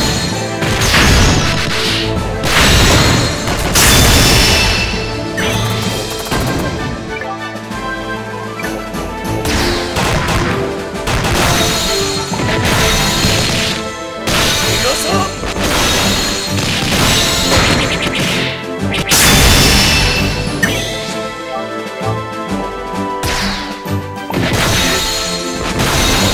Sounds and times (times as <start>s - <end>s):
Music: 0.0s - 26.3s.